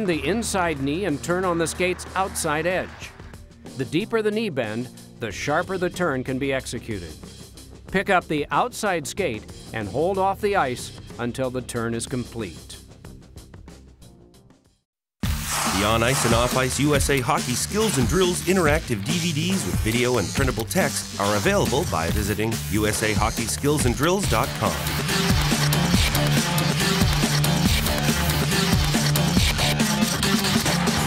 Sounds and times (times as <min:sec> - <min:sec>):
Speech: 0:00.0 - 0:03.2, 0:03.8 - 0:07.2, 0:07.9 - 0:12.8, 0:15.7 - 0:24.9
Music: 0:00.0 - 0:31.0.